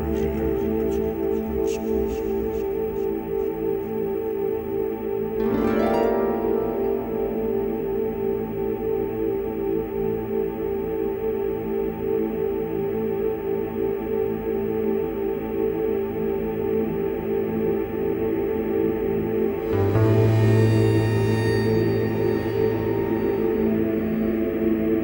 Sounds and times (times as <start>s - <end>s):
Theme music: 19.4s - 25.0s.